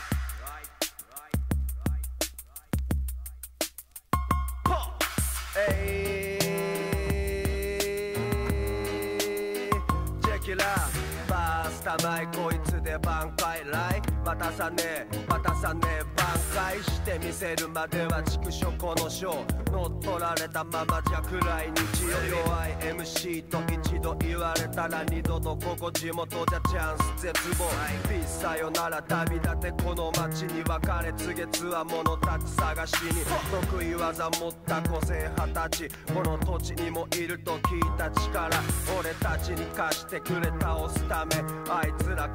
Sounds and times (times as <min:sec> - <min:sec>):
Music: 0:00.0 - 0:42.3.